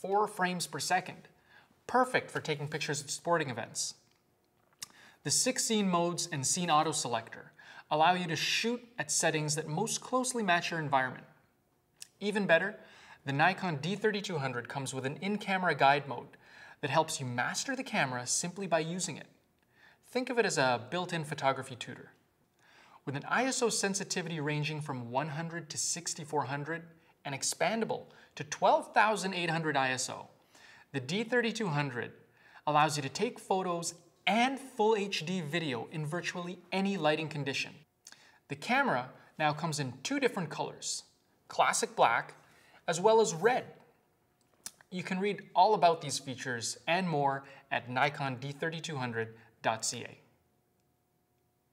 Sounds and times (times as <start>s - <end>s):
Speech: 0.0s - 1.3s, 1.9s - 4.0s, 5.2s - 11.4s, 12.0s - 19.4s, 20.1s - 22.2s, 23.0s - 37.9s, 38.5s - 43.9s, 44.7s - 50.3s.